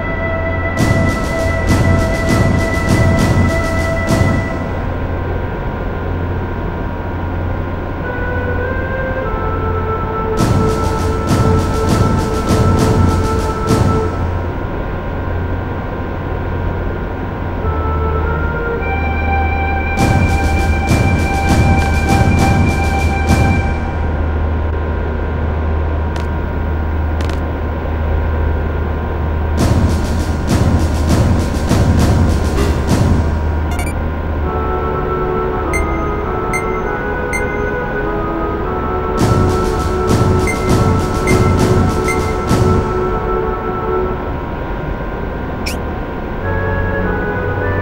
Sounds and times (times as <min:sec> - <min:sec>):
Music: 0:00.0 - 0:06.6, 0:07.4 - 0:15.7, 0:17.4 - 0:24.7, 0:29.6 - 0:47.8.